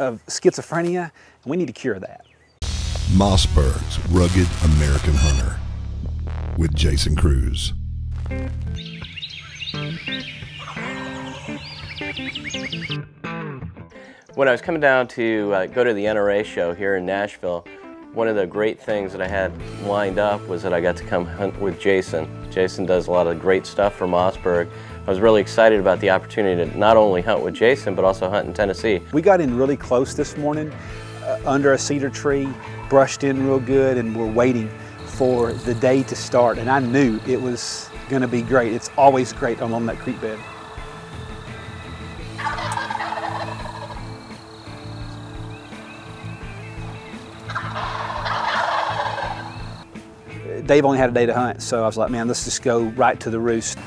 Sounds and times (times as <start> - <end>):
Speech: 0.0 - 2.2, 3.1 - 5.6, 6.6 - 7.8, 14.4 - 40.4, 50.4 - 53.8
Music: 2.6 - 53.8.